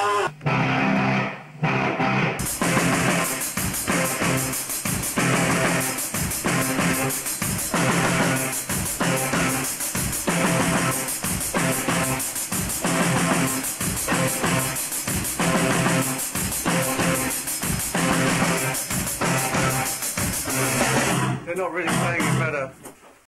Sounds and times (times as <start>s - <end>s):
Music: 0.0s - 23.0s
Speech: 21.5s - 22.8s.